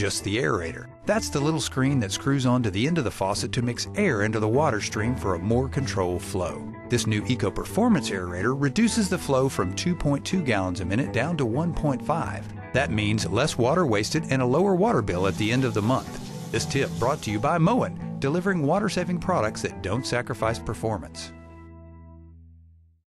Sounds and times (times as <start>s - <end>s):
Speech: 0.0s - 21.4s
Music: 0.0s - 23.0s
Water tap, faucet: 15.2s - 17.6s.